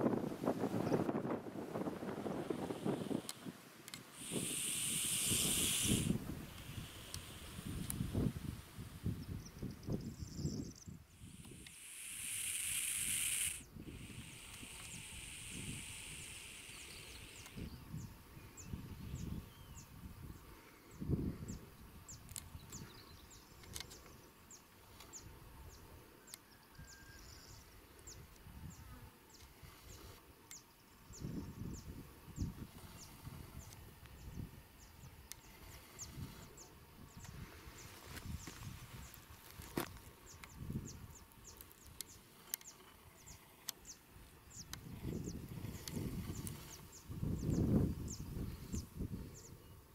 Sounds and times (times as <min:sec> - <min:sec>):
Hiss: 0:01.2 - 0:09.1, 0:11.1 - 0:17.8.